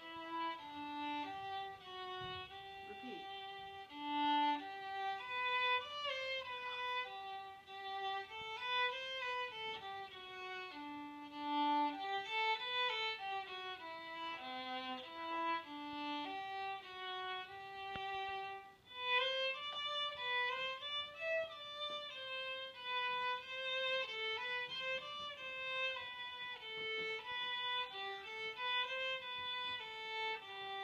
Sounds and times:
Violin, fiddle: 0.0 - 30.8.

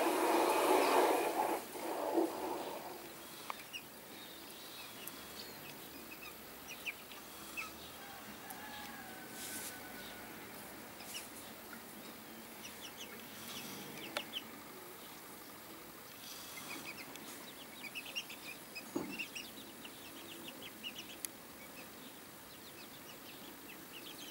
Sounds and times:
Livestock, farm animals, working animals: 0.0 - 24.3
Bird: 11.0 - 24.3.

